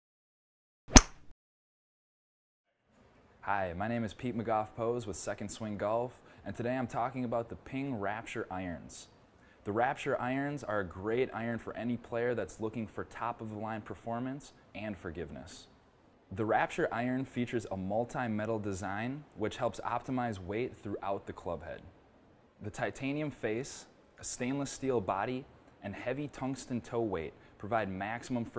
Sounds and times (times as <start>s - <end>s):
Speech: 3.4s - 15.7s, 16.3s - 21.9s, 22.6s - 28.5s.